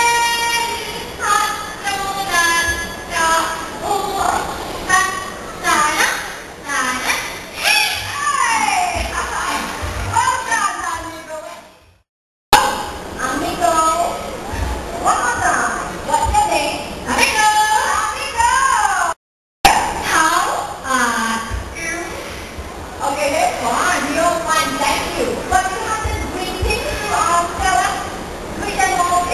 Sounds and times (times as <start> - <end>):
Speech: 0.0 - 11.7, 15.0 - 19.2, 23.0 - 29.3.